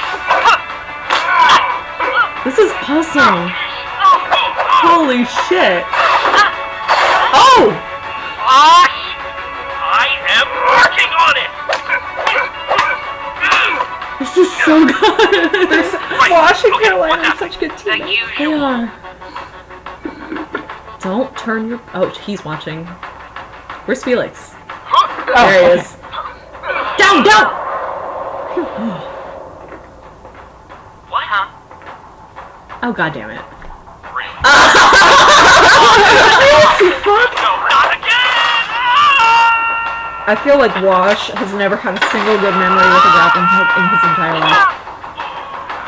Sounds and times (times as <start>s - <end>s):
Snicker: 14.9s - 16.2s, 20.0s - 20.7s, 34.4s - 37.0s.